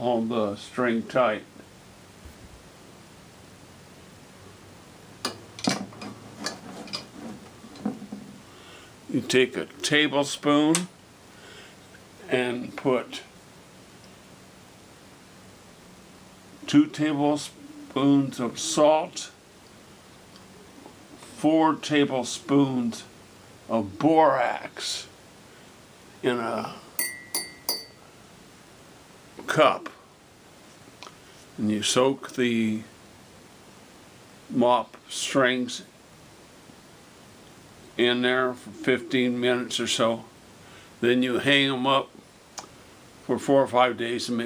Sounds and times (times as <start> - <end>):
Speech: 0.0 - 1.5, 9.1 - 10.9, 12.2 - 13.3, 16.7 - 19.4, 21.4 - 23.1, 23.7 - 25.2, 26.2 - 26.8, 29.4 - 30.0, 31.6 - 33.0, 34.5 - 35.9, 38.0 - 40.3, 41.0 - 42.2, 43.3 - 44.4.